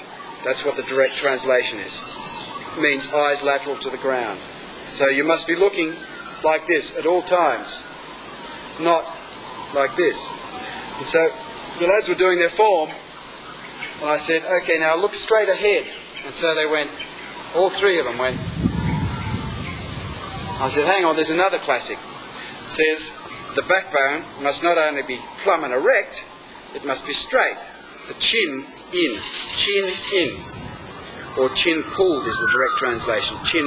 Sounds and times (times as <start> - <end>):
Outside, rural or natural: 0.0 - 33.6
Speech: 0.4 - 2.1, 2.8 - 7.9, 8.8 - 9.2, 9.8 - 10.4, 11.0 - 13.0, 14.0 - 18.4, 20.6 - 22.0, 22.7 - 30.5, 31.4 - 33.6.